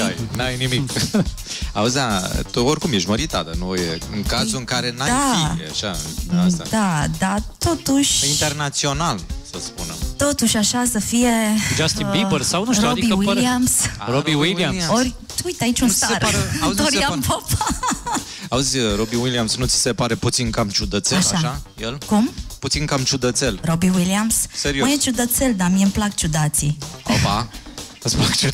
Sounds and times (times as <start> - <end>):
Speech: 0.0 - 1.2, 1.8 - 7.1, 8.2 - 10.0, 11.8 - 17.5, 18.5 - 24.1, 27.1 - 28.5
Music: 0.0 - 28.5.